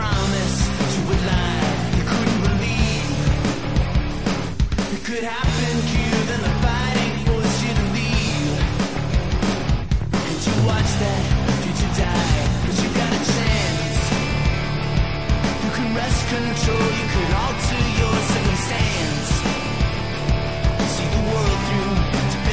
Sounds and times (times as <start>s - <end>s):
Music: 0.0s - 22.5s.